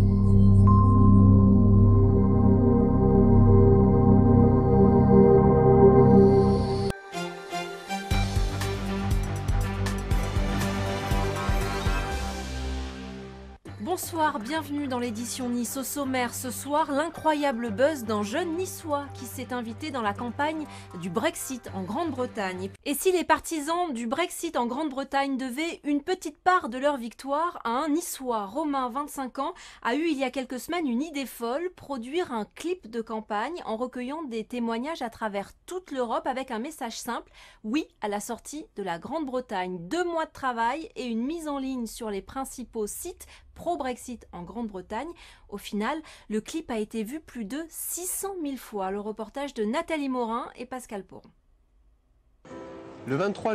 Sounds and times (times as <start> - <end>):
Speech: 13.8 - 51.3, 53.1 - 53.5.